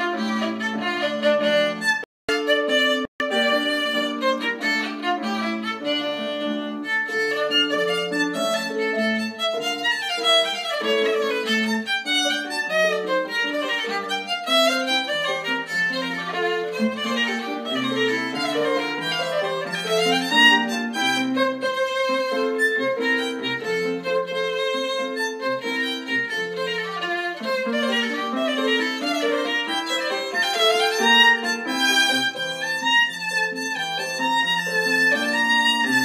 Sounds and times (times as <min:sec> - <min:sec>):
Violin, fiddle: 0:00.0 - 0:36.0.